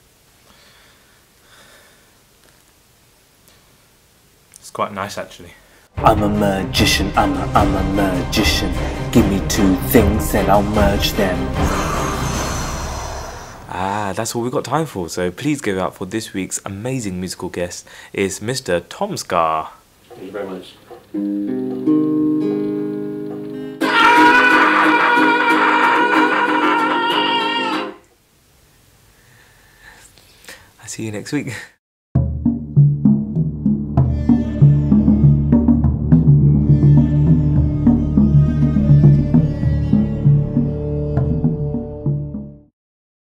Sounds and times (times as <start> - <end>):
Music: 6.0 - 13.8, 21.1 - 28.0, 32.2 - 42.7.